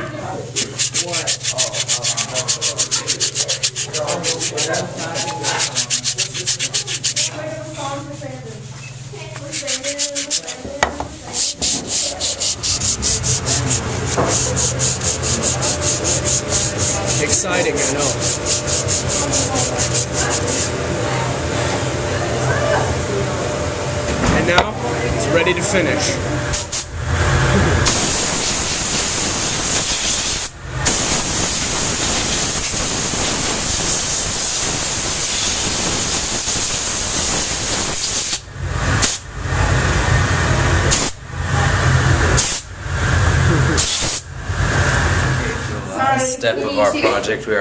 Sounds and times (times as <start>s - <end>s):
Rub: 0.5s - 20.8s
Sanding: 0.6s - 8.8s, 9.4s - 10.6s, 11.2s - 20.8s, 27.8s - 38.4s.